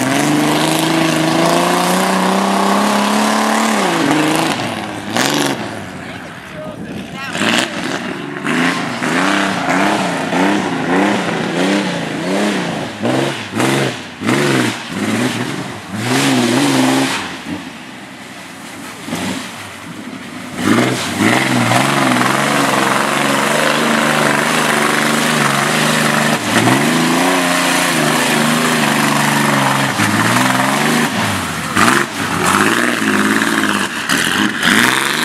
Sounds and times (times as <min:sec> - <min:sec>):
Speech: 0:06.0 - 0:08.9.